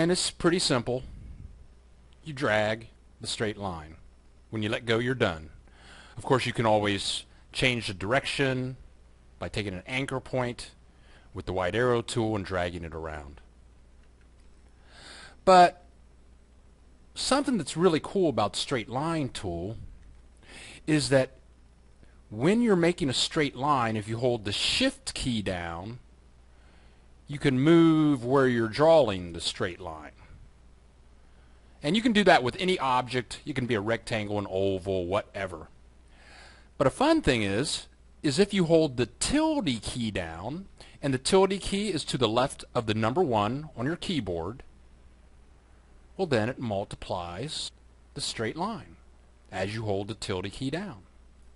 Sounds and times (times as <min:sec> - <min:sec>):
Speech: 0:00.0 - 0:01.1, 0:02.2 - 0:05.6, 0:06.2 - 0:08.8, 0:09.4 - 0:10.8, 0:11.4 - 0:13.5, 0:15.4 - 0:15.9, 0:17.2 - 0:19.9, 0:20.8 - 0:21.4, 0:22.3 - 0:26.0, 0:27.3 - 0:30.3, 0:31.8 - 0:35.8, 0:36.8 - 0:44.7, 0:46.2 - 0:51.1.